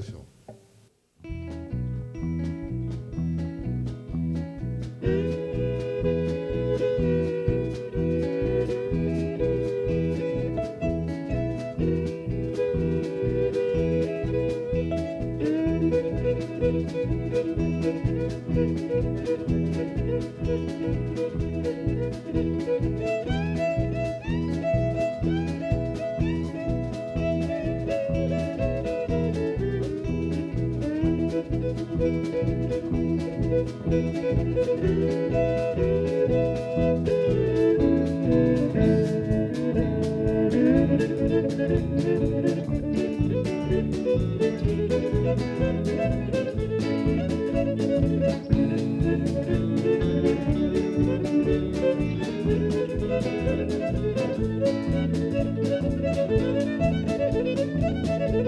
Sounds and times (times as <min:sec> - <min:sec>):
Violin, fiddle: 0:01.4 - 0:58.4.